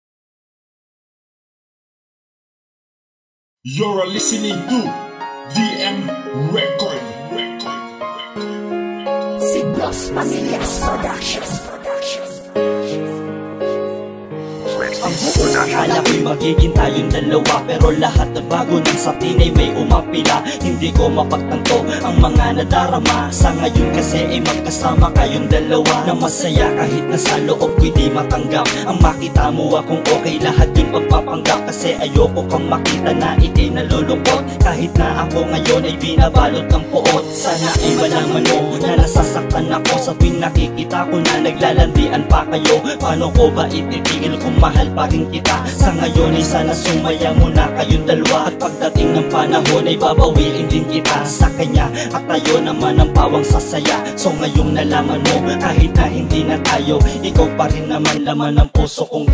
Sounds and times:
Tender music: 3.7s - 58.4s.

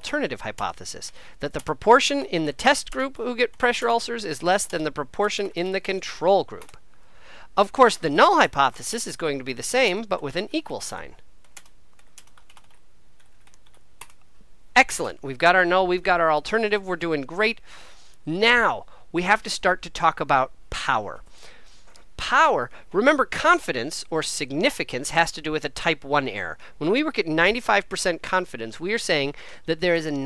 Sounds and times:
Speech: 0.0s - 6.8s, 7.6s - 11.2s, 14.8s - 17.6s, 18.2s - 21.2s, 22.2s - 30.2s
Computer keyboard: 11.4s - 14.2s.

